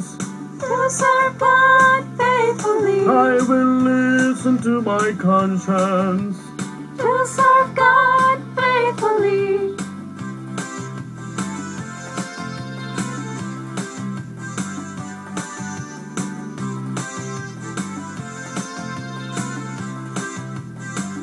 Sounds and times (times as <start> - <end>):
Funny music: 0.0 - 21.2
Independent music: 0.0 - 21.2
Soundtrack music: 0.0 - 21.2.